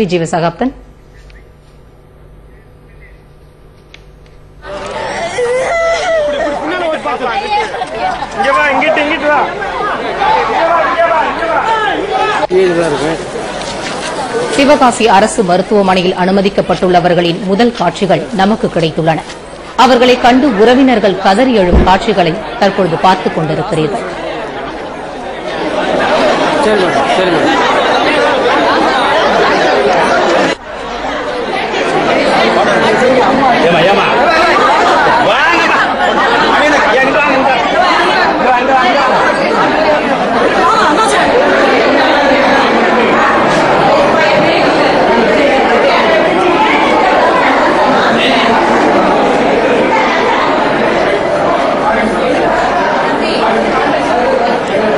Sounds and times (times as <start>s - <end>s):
Inside, public space: 0.0s - 54.9s.